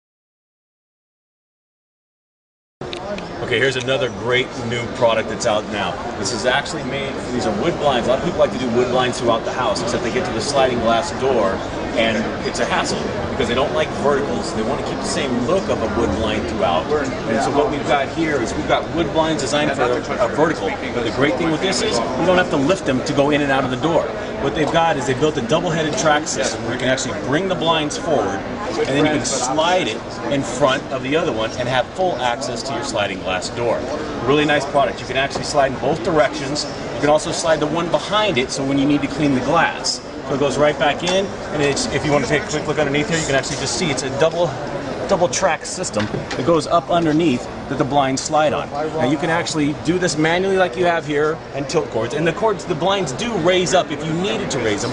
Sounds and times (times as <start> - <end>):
Speech: 2.9 - 54.9.